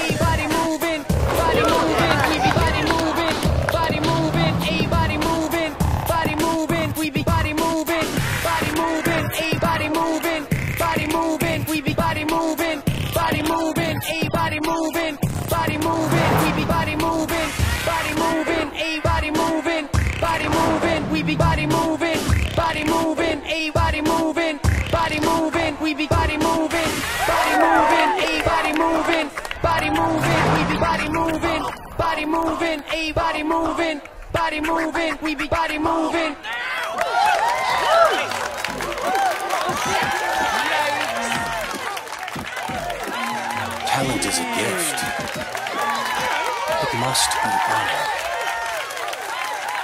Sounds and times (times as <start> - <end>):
Music: 0.0 - 36.3, 38.5 - 48.2.